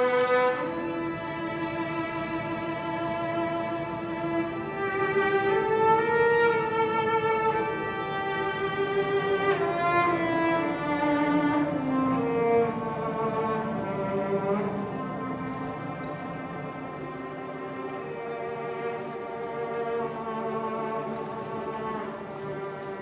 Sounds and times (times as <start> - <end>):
Orchestra: 0.0 - 23.0.